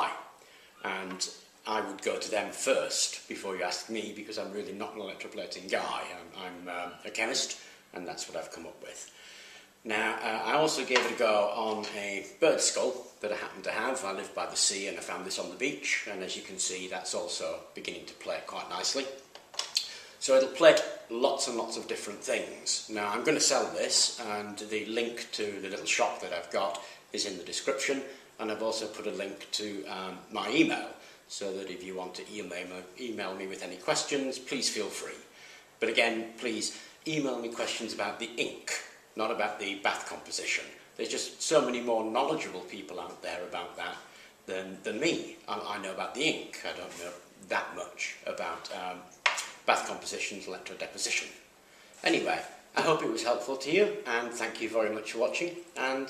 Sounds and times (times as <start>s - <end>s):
Speech: 0.0s - 9.2s, 9.8s - 56.0s
Inside, small room: 0.0s - 56.0s.